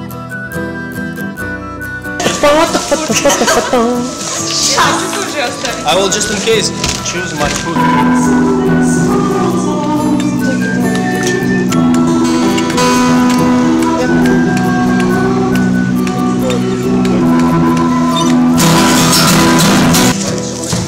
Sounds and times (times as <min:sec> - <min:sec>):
Theme music: 0:01.9 - 0:20.2.